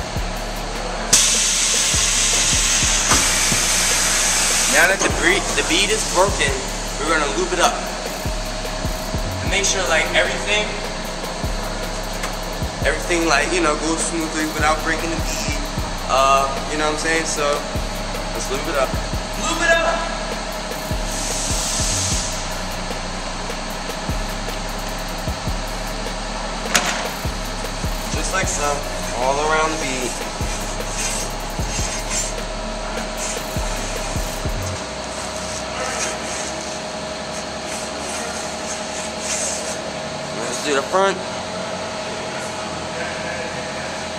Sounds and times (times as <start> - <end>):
Music: 0.0 - 36.8
Speech: 4.7 - 7.9, 9.5 - 10.8, 12.8 - 17.7, 18.3 - 20.2, 28.1 - 30.2, 40.4 - 41.3, 42.0 - 44.1.